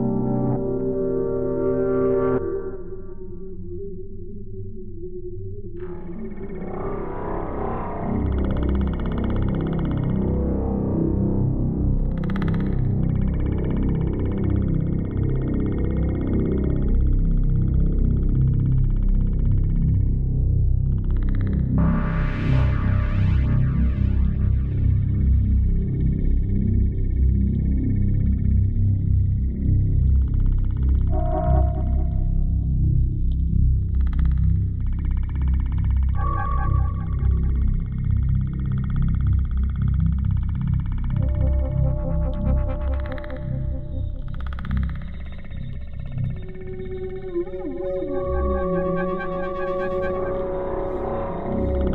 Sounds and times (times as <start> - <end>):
Ambient music: 0.0 - 51.9
Synthesizer: 0.0 - 51.9.